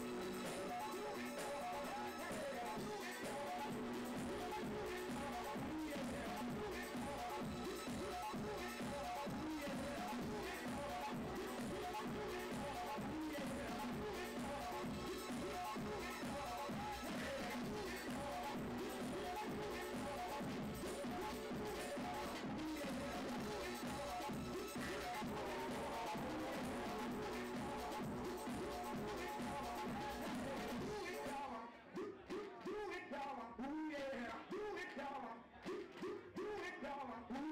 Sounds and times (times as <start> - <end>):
Techno: 0.0 - 37.5.